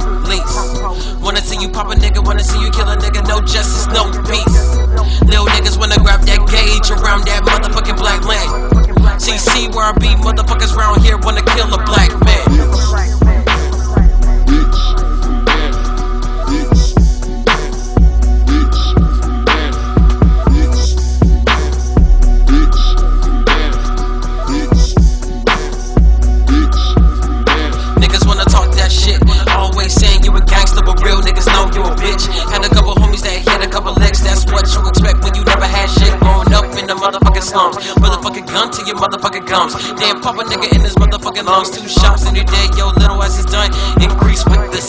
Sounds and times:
Hip hop music: 0.0s - 44.8s.

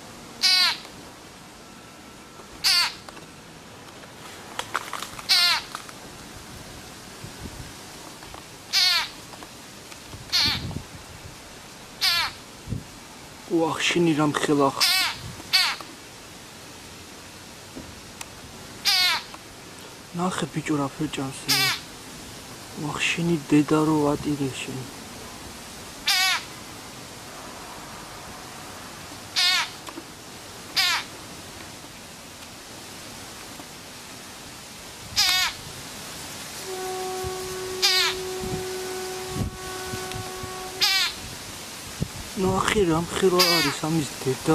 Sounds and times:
Animal: 5.3s - 5.7s, 12.0s - 12.4s
Speech: 13.5s - 14.9s, 20.1s - 21.8s, 22.8s - 24.9s, 42.4s - 44.5s.

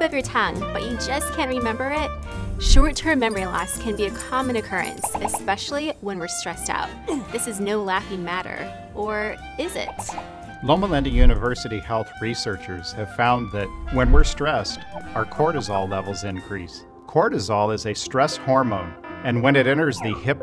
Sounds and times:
Music: 0.0s - 20.4s
Speech: 0.0s - 20.4s.

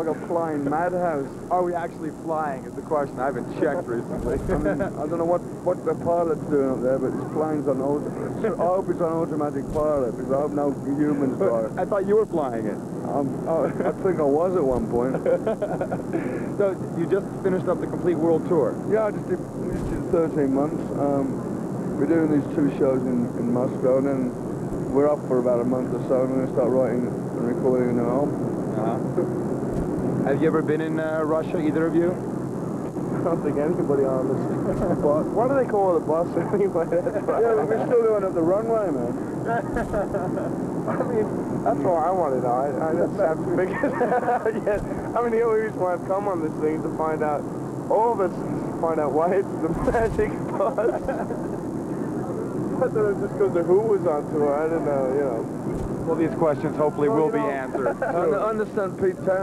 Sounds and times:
Speech: 0.0s - 15.4s, 16.6s - 21.4s, 22.0s - 29.2s, 30.2s - 32.2s, 33.2s - 39.2s, 40.9s - 43.9s, 44.5s - 51.1s, 52.2s - 59.4s.

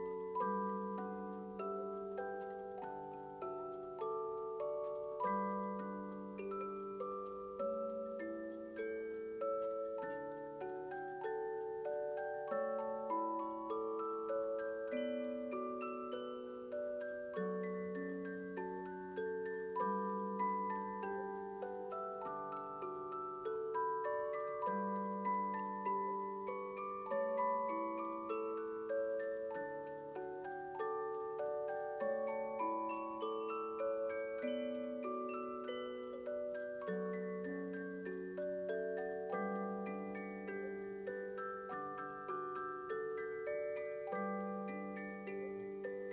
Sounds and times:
Glockenspiel: 0.0s - 46.1s
Marimba, xylophone: 0.0s - 46.1s.

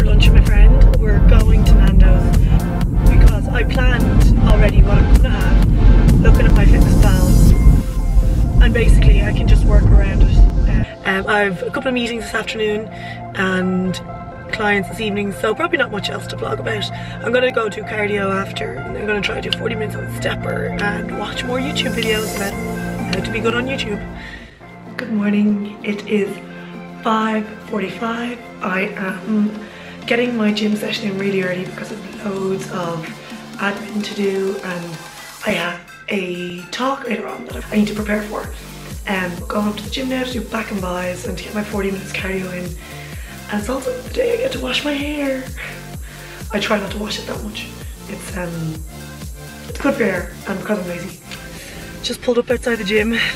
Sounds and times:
Speech: 0.0s - 2.4s, 3.1s - 5.6s, 6.2s - 7.5s, 8.6s - 24.0s, 25.0s - 26.4s, 27.0s - 42.8s, 43.5s - 45.8s, 46.5s - 48.8s, 49.7s - 51.2s, 52.0s - 53.3s
Music: 0.0s - 53.3s.

